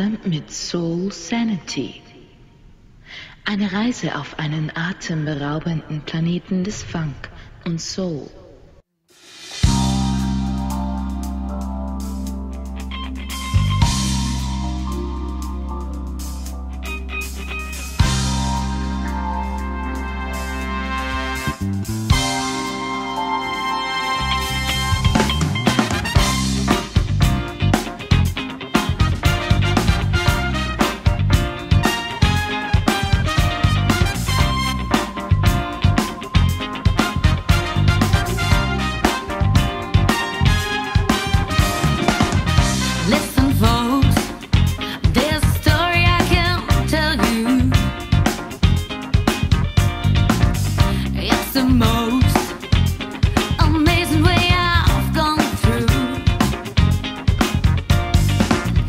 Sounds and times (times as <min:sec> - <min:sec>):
Speech: 0:00.0 - 0:02.2, 0:03.5 - 0:08.7
Music: 0:09.1 - 0:58.8.